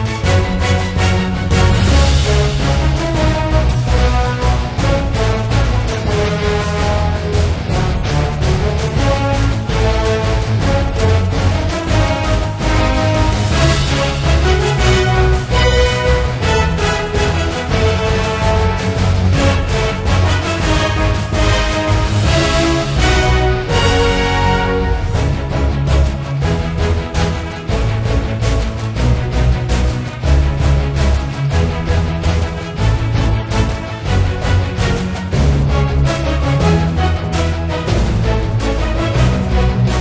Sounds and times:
Music: 0.0s - 40.0s.

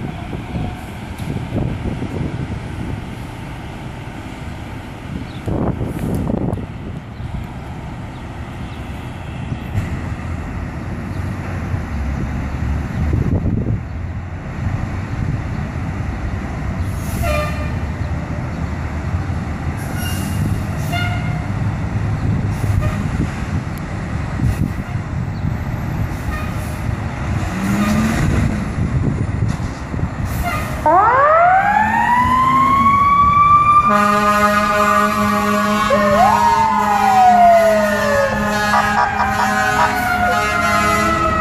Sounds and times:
Truck: 0.0s - 41.4s.

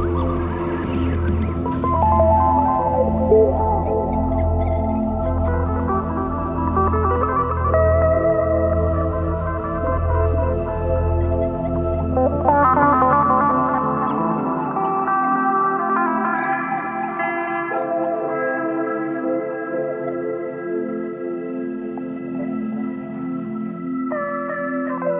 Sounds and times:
Hum: 0.0s - 14.6s.

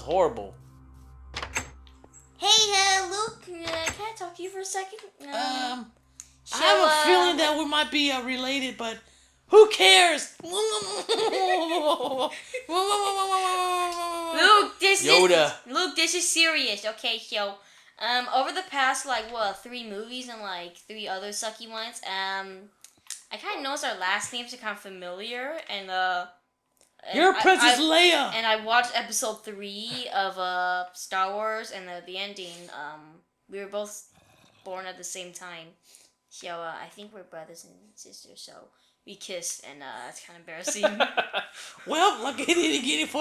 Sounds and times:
Speech: 0.0s - 0.5s, 2.4s - 5.9s, 6.5s - 10.9s, 13.1s - 26.3s, 27.0s - 34.0s, 36.4s - 43.2s
Belly laugh: 10.7s - 13.2s, 40.7s - 42.8s.

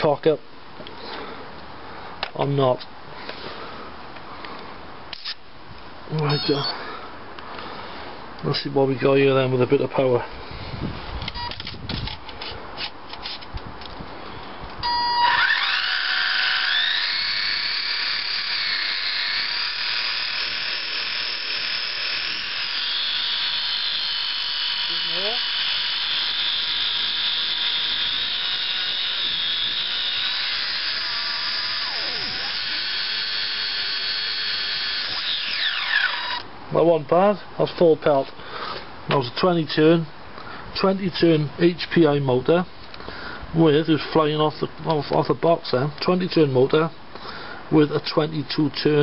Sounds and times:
Speech: 0.0s - 0.4s, 2.3s - 2.9s, 6.1s - 6.7s, 8.4s - 10.3s, 24.9s - 25.4s, 36.7s - 38.3s, 39.1s - 40.1s, 40.8s - 42.7s, 43.6s - 46.9s, 47.7s - 49.0s
Outside, urban or manmade: 0.0s - 49.0s.

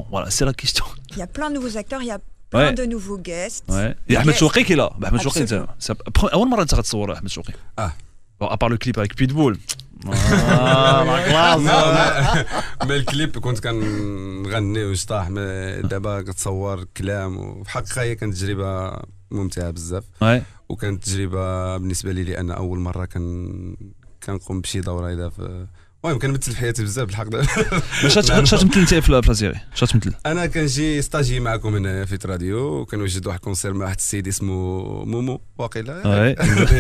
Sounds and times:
Speech: 2.6s - 36.8s.

